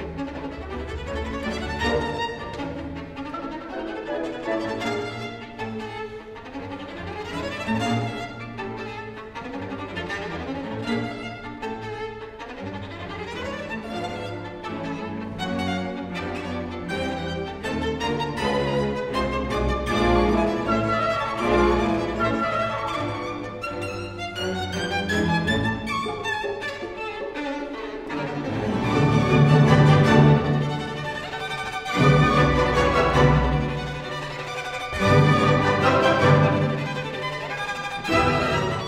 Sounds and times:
Violin, fiddle: 0:00.0 - 0:38.8.

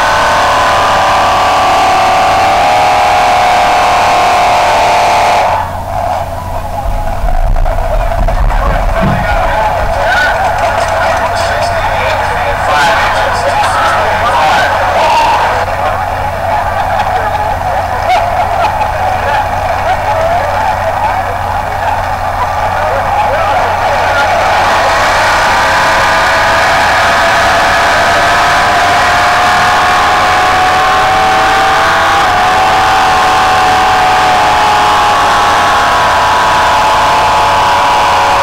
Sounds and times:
Car: 0:00.0 - 0:12.5, 0:15.6 - 0:38.4
Speech: 0:06.5 - 0:25.2.

